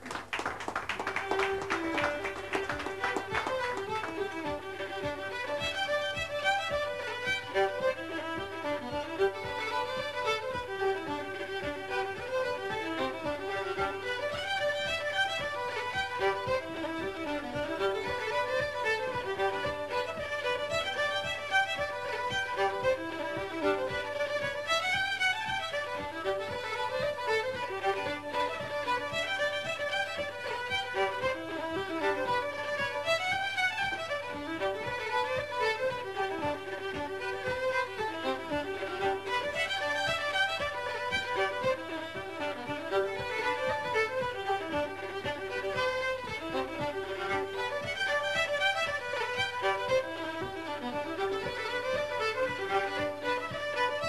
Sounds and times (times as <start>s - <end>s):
Violin, fiddle: 0.0s - 54.0s.